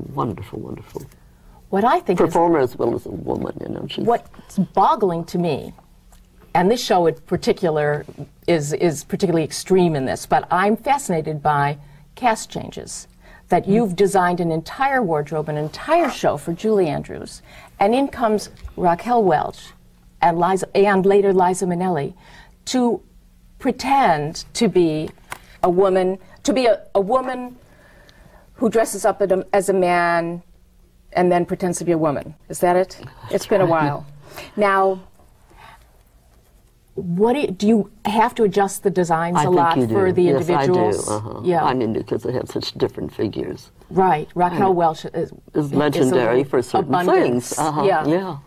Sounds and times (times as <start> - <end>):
Female speech, woman speaking: 0.0 - 1.0, 1.7 - 5.8, 6.5 - 23.0, 23.6 - 27.6, 28.6 - 30.5, 31.1 - 35.1, 37.0 - 48.4.